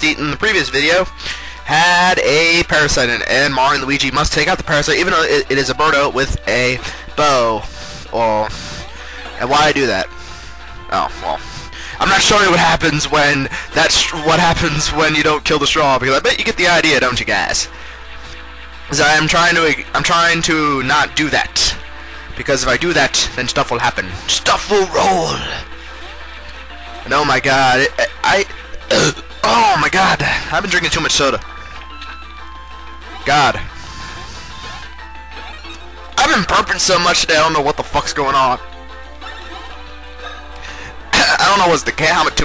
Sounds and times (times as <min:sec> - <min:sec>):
Speech: 0:01.7 - 0:08.5, 0:09.4 - 0:10.1, 0:12.0 - 0:17.7, 0:18.9 - 0:21.8, 0:22.4 - 0:25.6, 0:27.1 - 0:31.4, 0:36.2 - 0:38.6, 0:41.2 - 0:42.4.